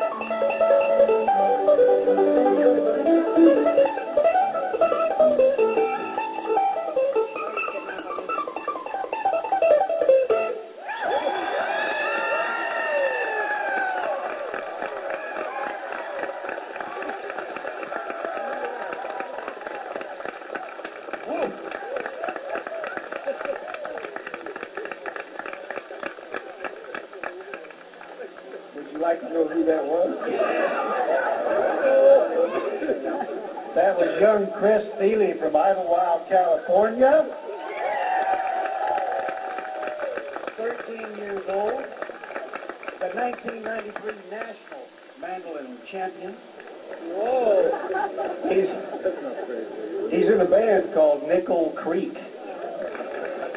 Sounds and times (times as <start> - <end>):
Speech: 33.8 - 37.4, 43.0 - 46.4, 50.1 - 52.3.